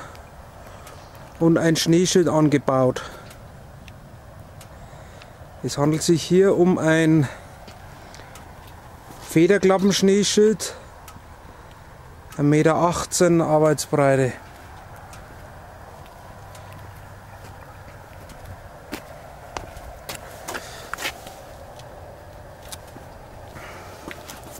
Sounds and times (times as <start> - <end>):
Speech: 1.4 - 3.2, 5.6 - 7.4, 9.3 - 10.9, 12.4 - 14.5.